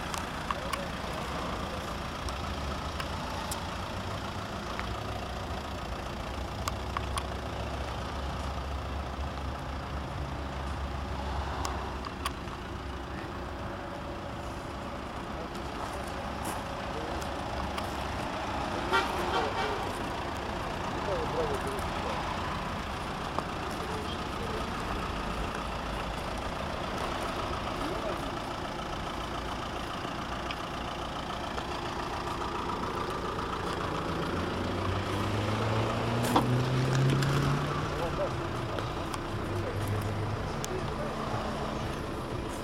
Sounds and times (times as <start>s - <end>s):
Engine: 0.0s - 42.6s.